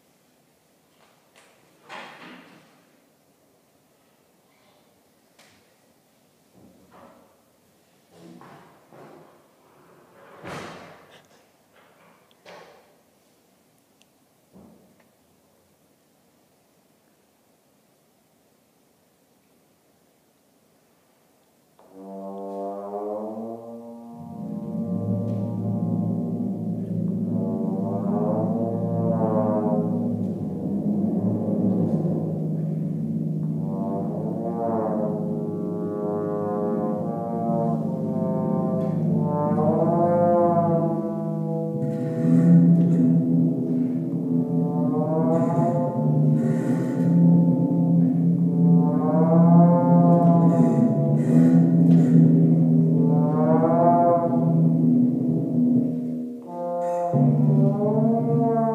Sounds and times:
Trombone: 21.8s - 58.7s.

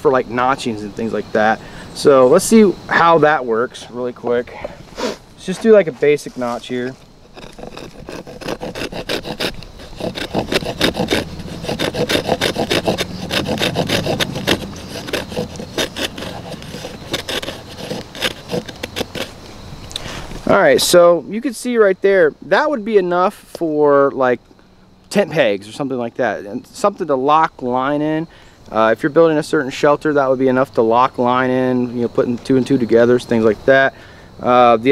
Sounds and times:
Speech: 0.0s - 4.6s, 5.4s - 7.0s, 20.4s - 24.4s, 25.1s - 34.9s
Outside, rural or natural: 0.0s - 34.9s.

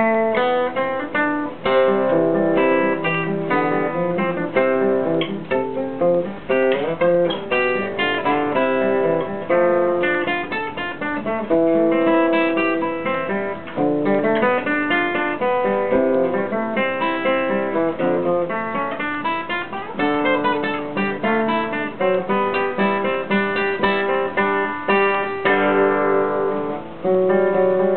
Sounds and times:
Acoustic guitar: 0.0s - 27.9s
Strum: 0.0s - 27.9s.

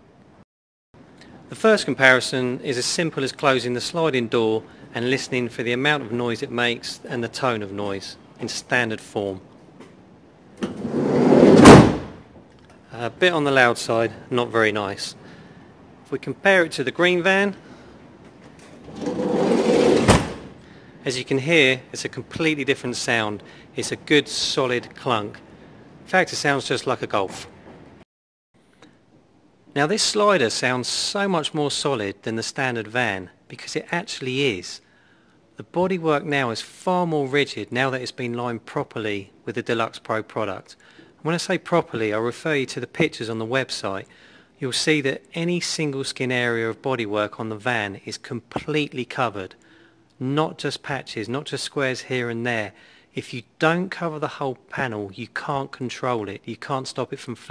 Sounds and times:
Speech: 1.5s - 9.5s, 12.9s - 15.2s, 16.1s - 17.6s, 21.0s - 25.4s, 26.1s - 27.6s, 29.7s - 34.8s, 35.6s - 49.6s, 50.2s - 57.5s.

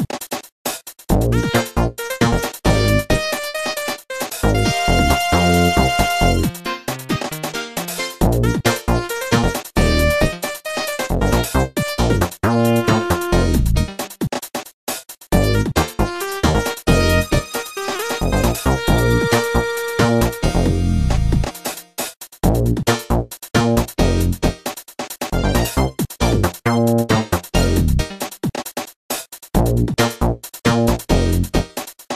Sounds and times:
Theme music: 1.3s - 13.8s, 15.4s - 21.6s.

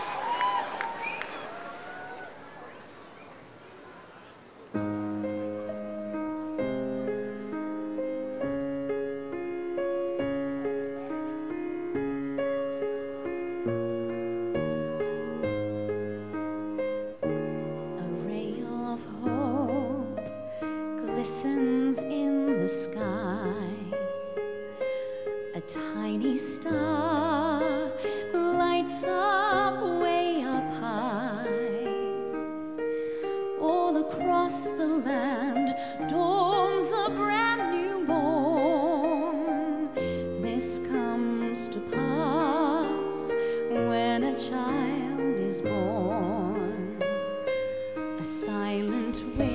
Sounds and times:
Music: 4.7s - 49.5s.

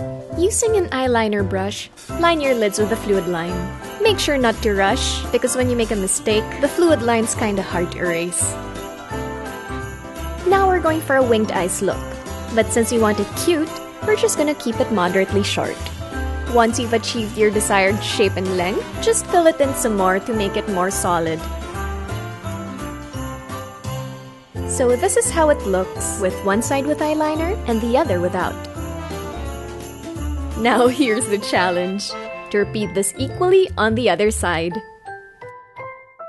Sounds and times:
Music: 0.0s - 36.2s
Speech: 0.4s - 8.5s, 10.5s - 12.0s, 12.6s - 15.8s, 16.5s - 21.4s, 24.7s - 28.6s, 30.6s - 34.8s.

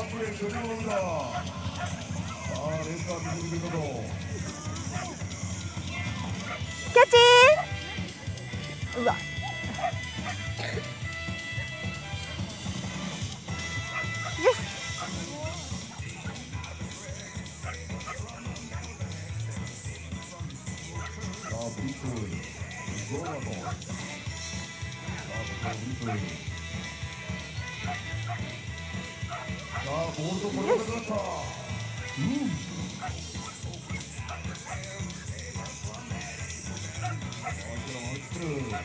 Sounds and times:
Speech: 0.0s - 1.6s, 2.2s - 9.2s, 14.4s - 24.2s, 25.1s - 26.5s, 29.7s - 32.7s, 35.0s - 38.8s
Music: 0.0s - 38.8s
Bow-wow: 1.3s - 3.8s, 4.8s - 5.2s, 6.4s - 6.7s, 9.2s - 10.4s, 13.8s - 15.3s, 17.6s - 18.3s, 21.4s - 21.7s, 25.2s - 26.4s, 27.8s - 28.6s, 29.2s - 30.0s, 30.6s - 31.0s, 32.9s - 34.9s, 37.0s - 37.7s.

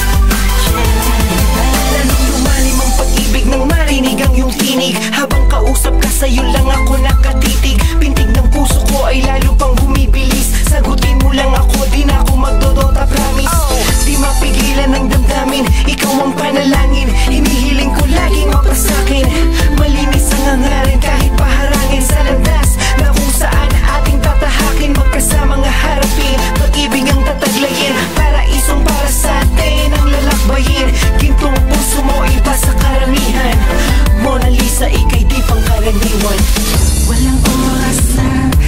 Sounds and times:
Exciting music: 0.0s - 38.6s
Pop music: 0.0s - 38.6s.

